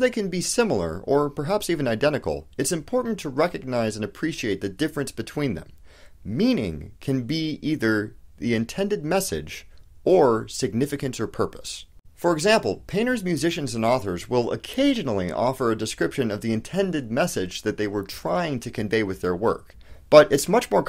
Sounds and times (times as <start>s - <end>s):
Speech: 0.0s - 20.8s.